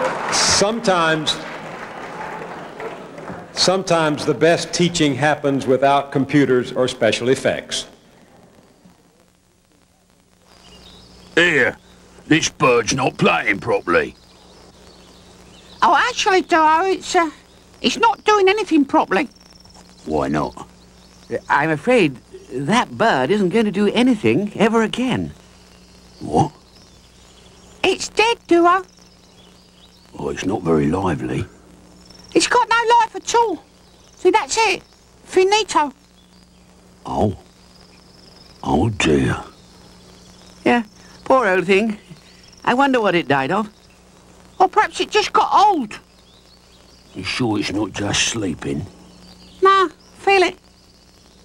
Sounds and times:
Speech: 3.4s - 7.9s, 11.4s - 14.2s, 20.0s - 20.7s, 26.2s - 26.6s, 30.2s - 31.5s, 32.4s - 33.6s, 34.2s - 36.0s, 37.1s - 37.4s, 38.6s - 39.5s, 40.7s - 42.0s, 42.7s - 43.7s, 44.6s - 46.0s, 47.2s - 48.9s, 49.6s - 50.6s.

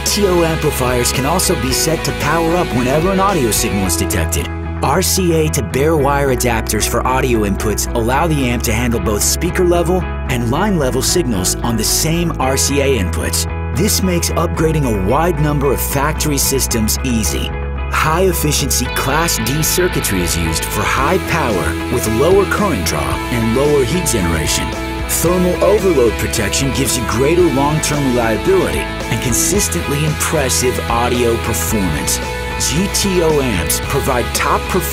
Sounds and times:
Music: 0.0s - 34.9s
Speech: 0.0s - 34.9s.

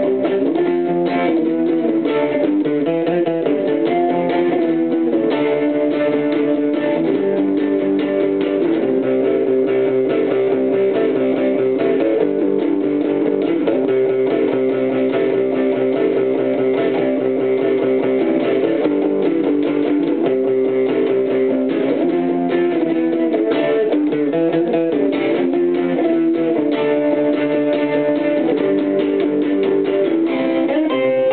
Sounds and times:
Strum: 0.0s - 31.3s.

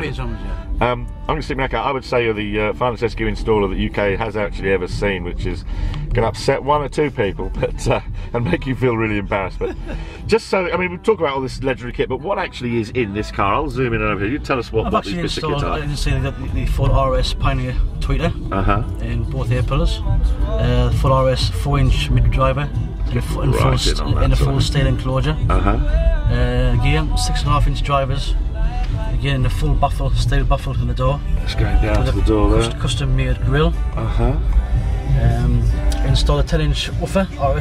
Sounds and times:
Speech: 0.0s - 5.6s, 6.2s - 9.7s, 10.3s - 20.0s, 20.6s - 28.3s, 29.2s - 34.4s, 35.1s - 37.6s
Music: 0.0s - 37.6s.

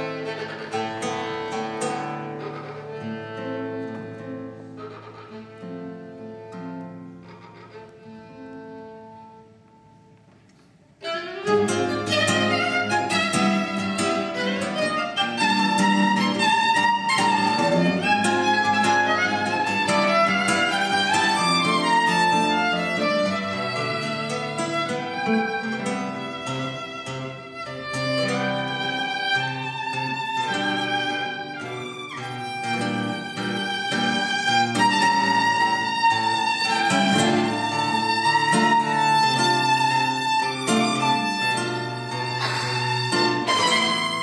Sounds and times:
Violin, fiddle: 0.0s - 9.6s, 11.0s - 44.2s
Guitar: 0.0s - 44.2s.

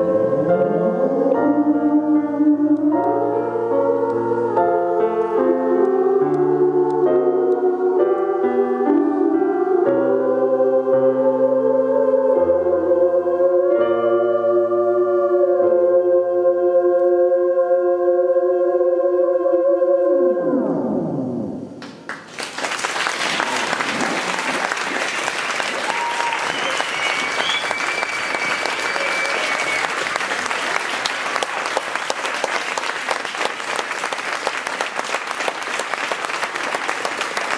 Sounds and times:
Piano: 0.0s - 21.8s, 23.1s - 37.5s.

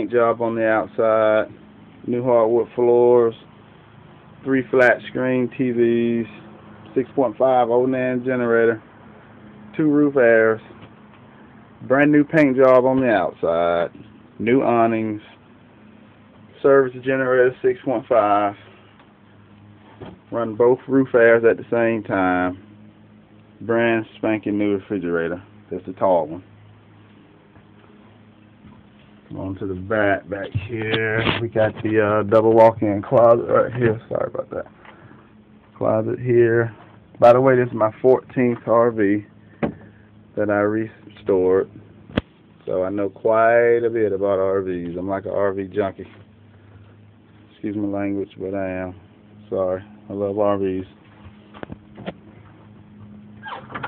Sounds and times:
Speech: 0.0s - 3.5s, 4.4s - 8.8s, 9.7s - 10.7s, 11.8s - 15.4s, 16.6s - 18.6s, 20.3s - 22.6s, 23.6s - 26.5s, 29.3s - 34.7s, 35.8s - 39.3s, 40.4s - 41.7s, 42.6s - 46.2s, 47.5s - 51.0s.

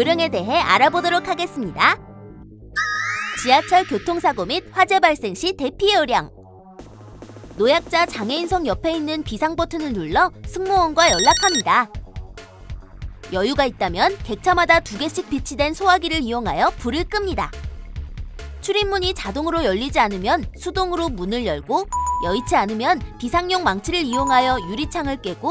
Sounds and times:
Speech: 0.0s - 2.0s, 3.4s - 6.3s, 7.6s - 11.9s, 13.3s - 17.5s, 18.6s - 25.5s
Music: 0.0s - 25.5s.

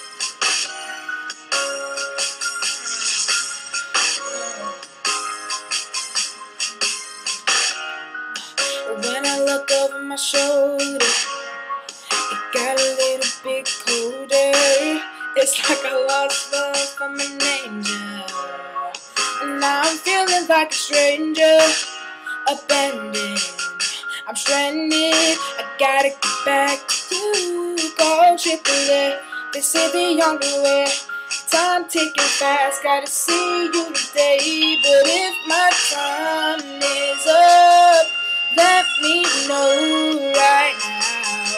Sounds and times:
Music: 0.0s - 41.5s
Male singing: 13.9s - 18.4s.

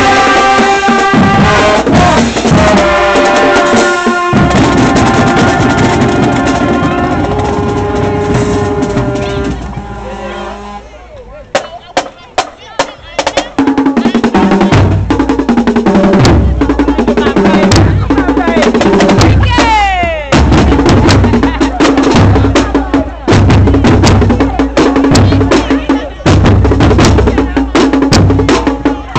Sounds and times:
Drum roll: 0.0s - 10.7s, 11.5s - 29.1s
Speech: 16.4s - 20.4s, 24.3s - 26.4s, 27.1s - 29.1s.

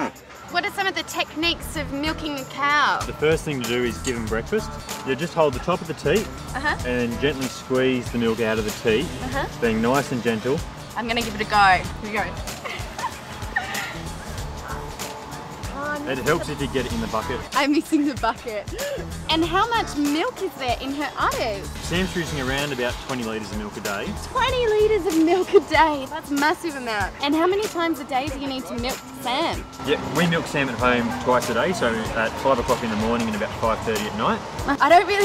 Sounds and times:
Music: 0.0s - 35.2s.

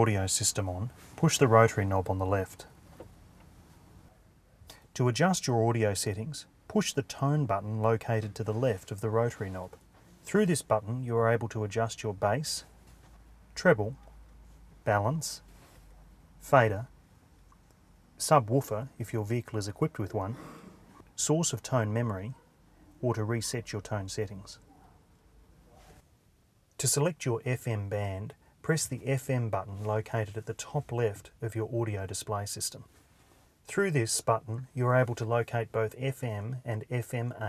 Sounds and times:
Speech: 0.0s - 2.7s, 5.0s - 12.7s, 13.6s - 14.0s, 14.8s - 15.5s, 16.4s - 16.9s, 18.2s - 20.4s, 21.2s - 22.4s, 23.0s - 24.8s, 26.8s - 32.9s, 33.7s - 37.4s.

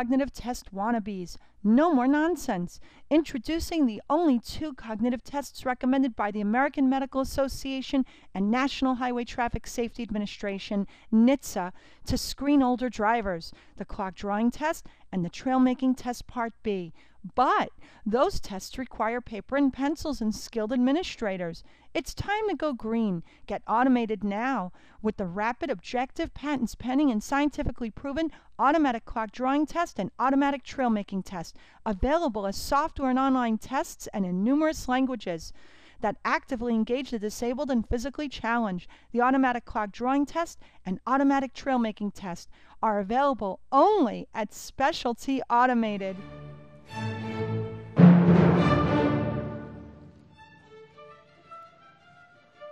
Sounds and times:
Speech: 0.0s - 46.2s.

